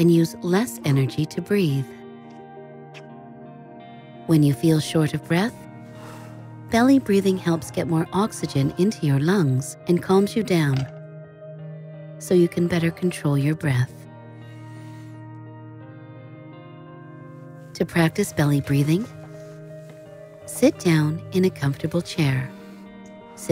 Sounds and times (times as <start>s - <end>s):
Music: 0.0s - 23.5s
Speech: 4.3s - 5.6s, 6.8s - 10.9s, 12.2s - 14.0s, 17.8s - 19.1s, 20.5s - 22.5s.